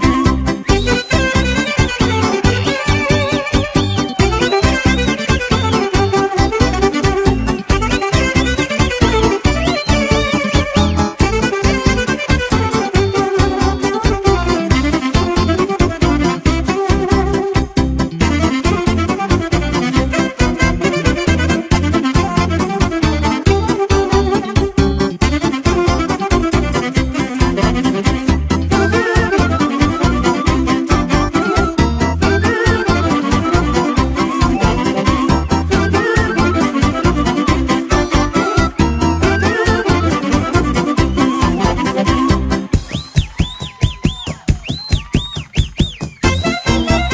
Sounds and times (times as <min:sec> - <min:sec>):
Saxophone: 0:00.0 - 0:47.1.